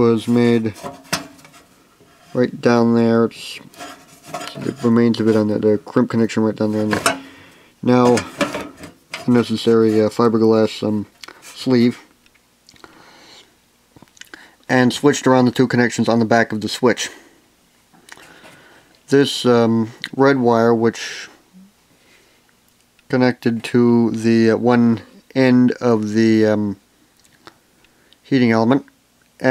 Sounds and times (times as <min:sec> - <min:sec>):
Speech: 0:00.0 - 0:00.8, 0:02.4 - 0:03.8, 0:04.4 - 0:07.1, 0:07.8 - 0:08.4, 0:09.2 - 0:12.1, 0:14.7 - 0:17.3, 0:19.1 - 0:21.7, 0:23.1 - 0:26.8, 0:28.2 - 0:29.5.